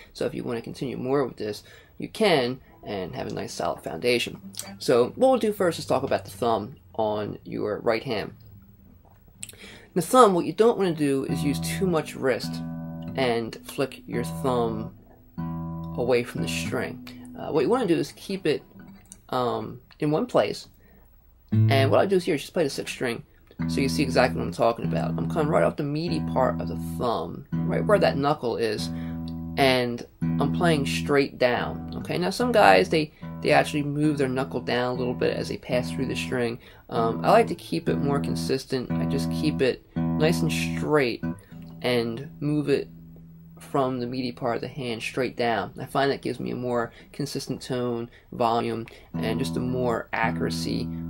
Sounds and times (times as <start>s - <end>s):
Speech: 0.0s - 8.4s, 9.4s - 15.0s, 16.0s - 20.7s, 21.6s - 28.9s, 29.6s - 42.9s, 43.6s - 50.9s
Guitar: 0.0s - 51.1s.